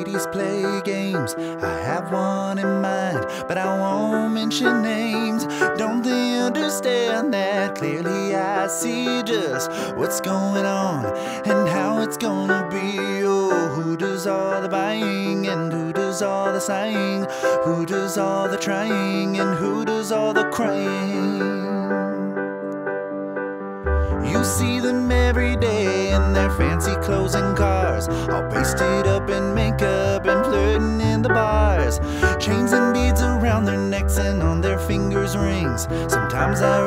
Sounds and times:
Happy music: 0.0s - 36.8s.

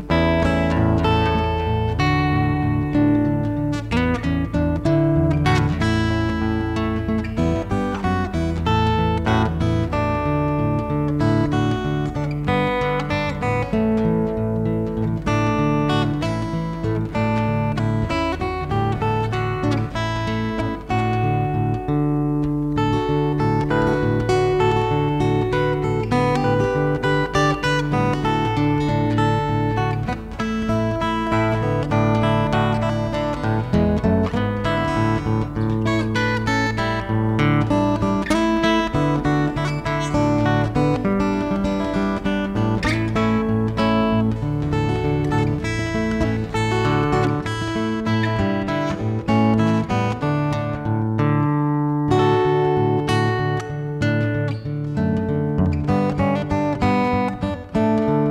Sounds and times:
Music: 0.0s - 58.3s.

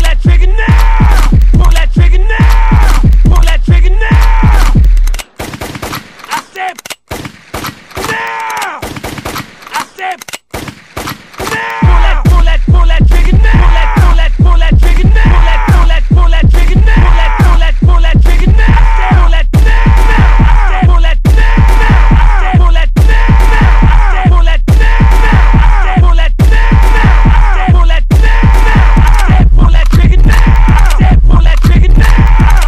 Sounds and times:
Music: 0.0s - 5.2s, 11.8s - 32.6s
Speech: 6.3s - 6.9s, 9.7s - 10.3s, 11.5s - 19.4s.

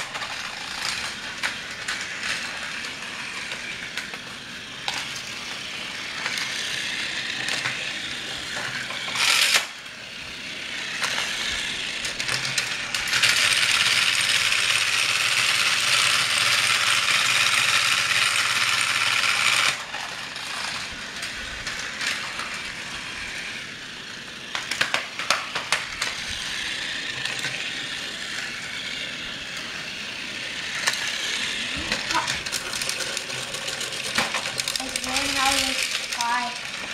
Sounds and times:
Inside, small room: 0.0s - 36.9s.

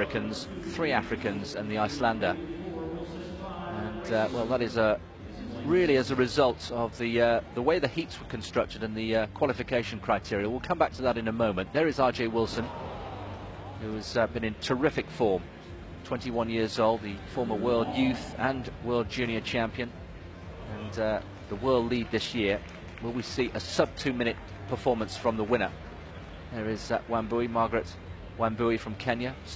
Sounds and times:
Speech: 0.0s - 12.8s, 13.8s - 15.4s, 16.0s - 19.9s, 20.7s - 25.8s, 26.5s - 29.5s
Music: 0.0s - 29.5s
Outside, urban or manmade: 0.0s - 29.5s.

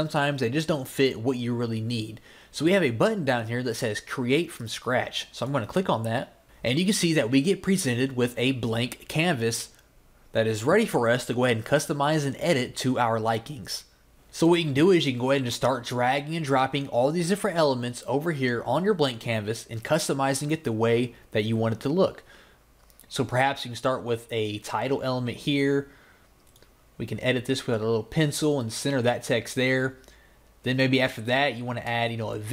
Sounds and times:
Speech: 0.0s - 22.3s, 23.1s - 25.9s, 27.0s - 30.0s, 30.6s - 32.5s.

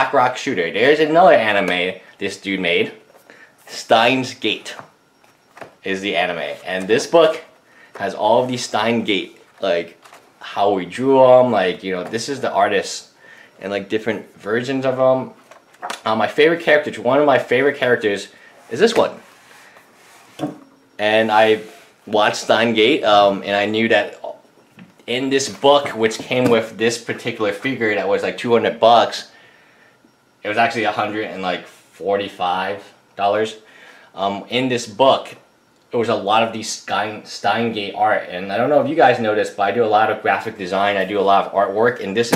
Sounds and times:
Speech: 0.0s - 3.0s, 3.7s - 4.9s, 5.8s - 15.4s, 16.0s - 19.2s, 21.0s - 24.4s, 25.0s - 29.3s, 30.4s - 33.6s, 34.2s - 42.3s
Inside, small room: 0.0s - 42.3s.

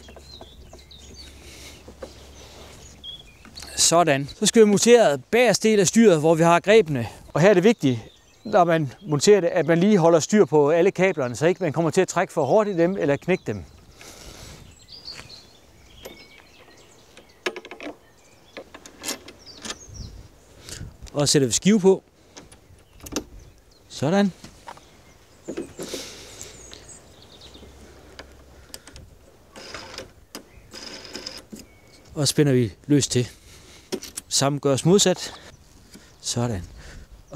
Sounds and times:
Speech: 3.6s - 13.7s, 21.1s - 22.0s, 23.9s - 24.4s, 32.2s - 33.4s, 34.3s - 35.4s, 36.2s - 36.7s.

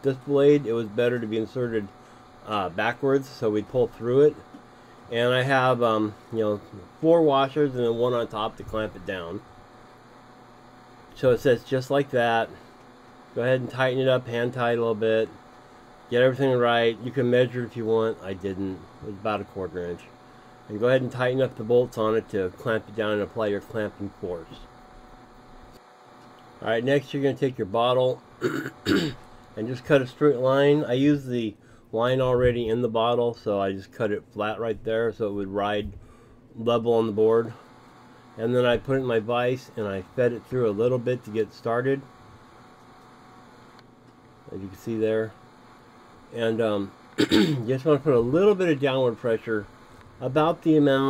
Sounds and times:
Speech: 0.0s - 4.4s, 5.1s - 9.4s, 11.1s - 12.6s, 13.4s - 15.4s, 16.1s - 24.7s, 26.6s - 36.0s, 36.6s - 37.6s, 38.4s - 42.1s, 44.5s - 45.4s, 46.3s - 51.0s.

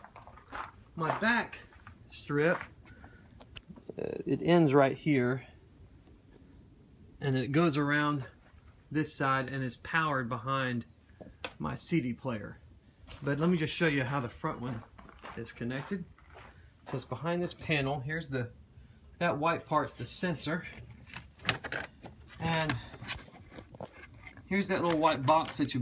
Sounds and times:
Speech: 1.0s - 2.7s, 3.9s - 5.5s, 7.2s - 10.9s, 11.6s - 12.6s, 13.2s - 16.1s, 16.8s - 18.6s, 19.2s - 20.8s, 22.4s - 22.9s, 24.5s - 25.8s.

